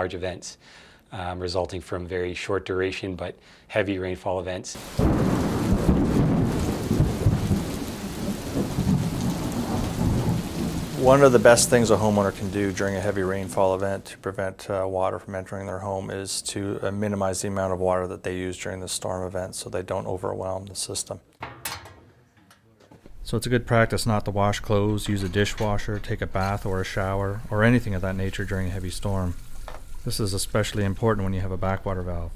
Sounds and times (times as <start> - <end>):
Thunder: 4.8 - 12.4
Rain on surface: 4.8 - 14.1, 23.2 - 32.3.